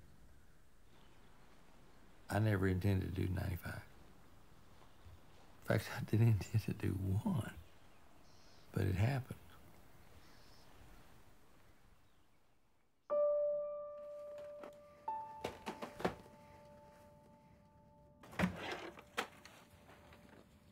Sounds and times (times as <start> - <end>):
Speech: 2.3 - 3.9, 5.6 - 7.6, 8.7 - 9.5
Music: 13.1 - 18.2.